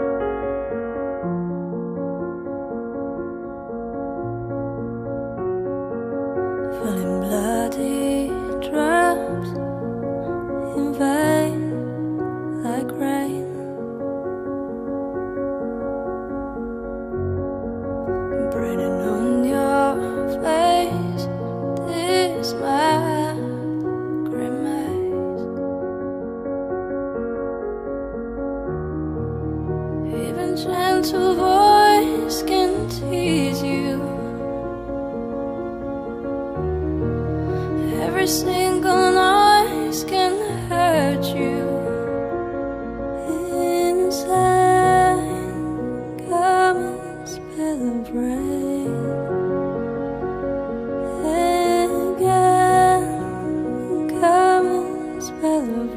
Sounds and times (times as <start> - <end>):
Music: 0.0 - 55.9.